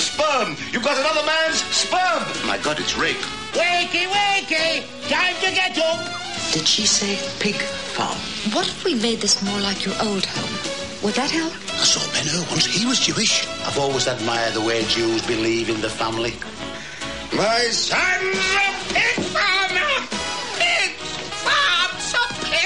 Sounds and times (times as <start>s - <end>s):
Music: 0.0s - 22.6s.